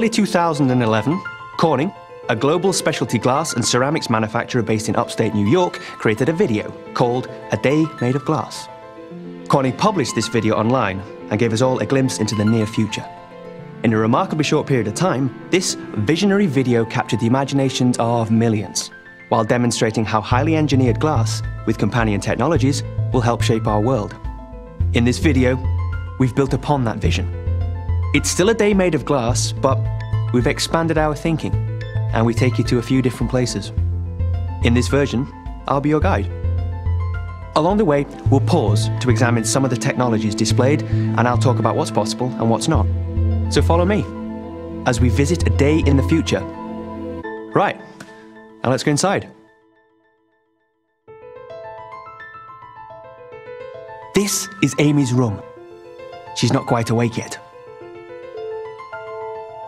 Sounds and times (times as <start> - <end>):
Speech: 0.0 - 8.7, 9.5 - 13.1, 13.8 - 24.2, 24.9 - 25.6, 26.2 - 27.3, 28.2 - 33.8, 34.6 - 36.3, 37.6 - 42.9, 43.5 - 44.1, 44.9 - 46.5, 47.5 - 47.8, 48.6 - 49.4, 54.2 - 55.5, 56.4 - 57.4
Music: 0.0 - 59.6.